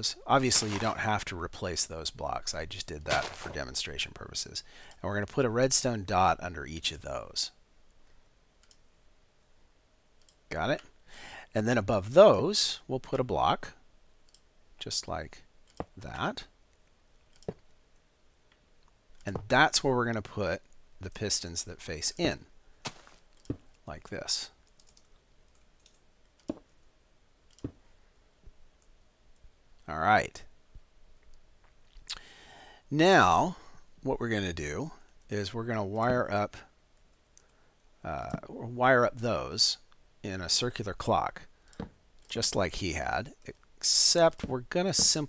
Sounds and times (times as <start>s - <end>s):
Speech: 0.0s - 7.6s, 10.5s - 10.9s, 11.6s - 13.8s, 14.8s - 16.5s, 19.2s - 22.5s, 23.9s - 24.6s, 29.8s - 30.5s, 32.9s - 36.7s, 38.0s - 41.5s, 42.3s - 45.2s.